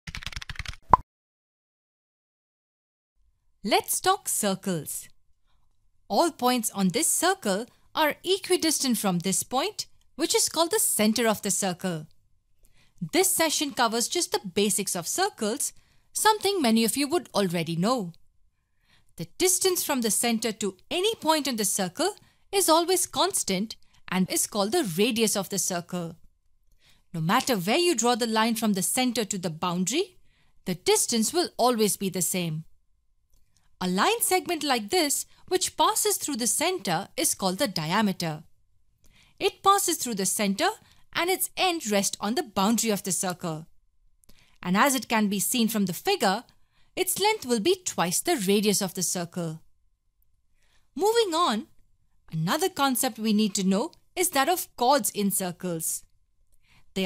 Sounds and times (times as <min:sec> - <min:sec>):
Speech: 0:03.6 - 0:05.1, 0:06.1 - 0:12.1, 0:13.0 - 0:18.2, 0:19.2 - 0:26.2, 0:27.2 - 0:32.7, 0:33.8 - 0:38.5, 0:39.4 - 0:43.7, 0:44.6 - 0:49.6, 0:51.0 - 0:51.7, 0:52.3 - 0:56.1.